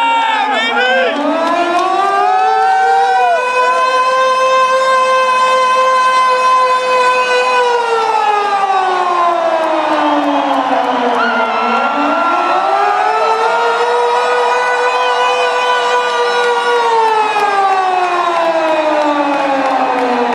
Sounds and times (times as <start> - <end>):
Siren: 0.0 - 20.3.